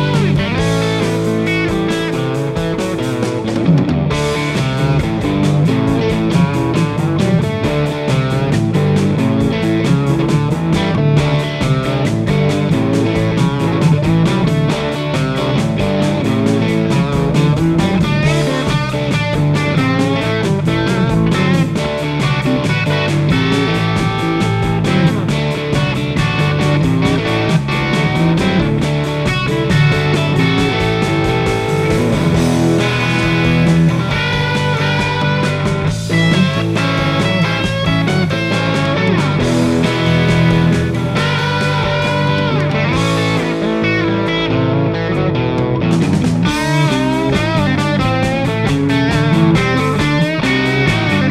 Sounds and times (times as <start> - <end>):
Music: 0.0 - 51.3.